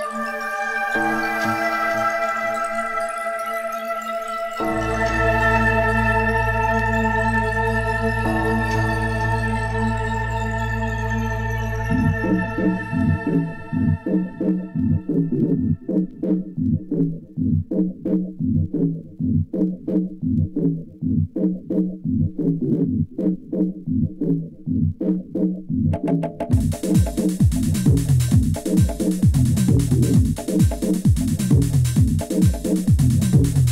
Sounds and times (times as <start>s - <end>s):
Music: 0.0s - 33.7s.